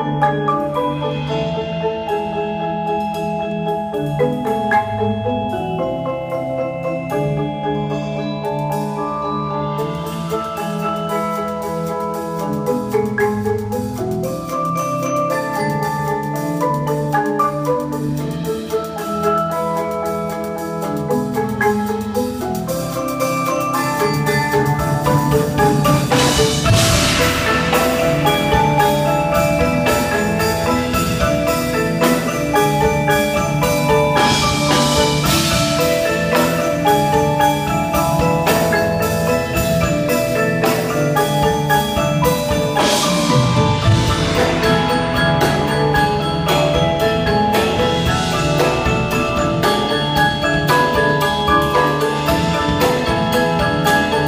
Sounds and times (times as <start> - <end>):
Marimba, xylophone: 0.0 - 54.2.